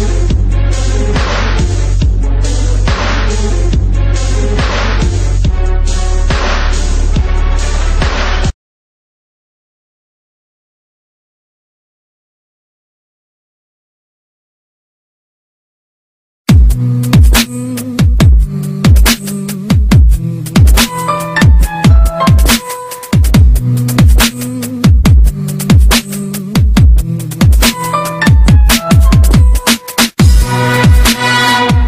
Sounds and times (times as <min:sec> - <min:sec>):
Drum and bass: 0:00.0 - 0:08.5, 0:16.5 - 0:31.8
Dubstep: 0:16.5 - 0:31.8.